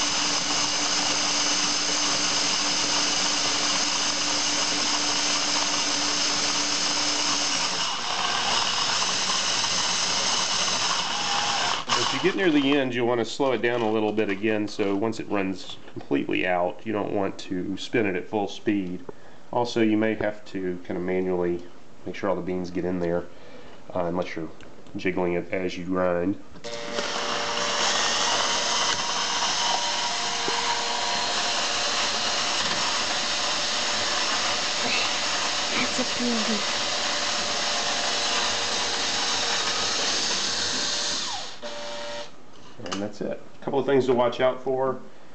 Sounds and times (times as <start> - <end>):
Blender: 0.0 - 12.7, 26.7 - 42.4.